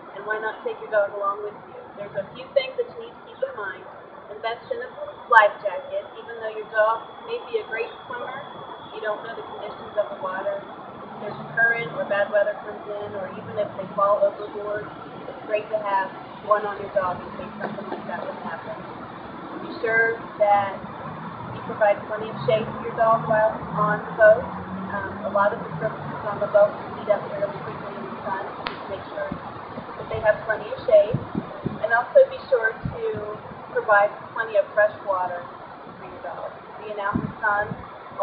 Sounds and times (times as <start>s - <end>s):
Speech: 0.0s - 14.9s, 15.5s - 18.8s, 19.7s - 20.8s, 21.6s - 29.4s, 30.0s - 38.2s.